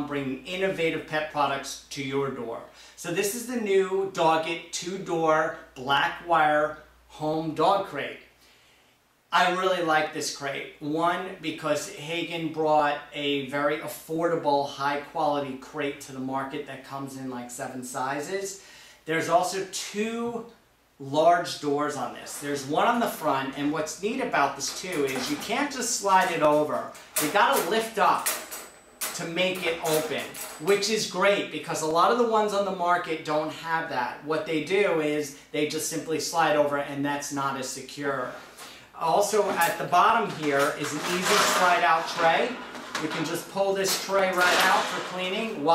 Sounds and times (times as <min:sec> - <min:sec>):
Speech: 0:00.0 - 0:08.3, 0:09.3 - 0:28.4, 0:29.1 - 0:38.4, 0:39.0 - 0:45.7.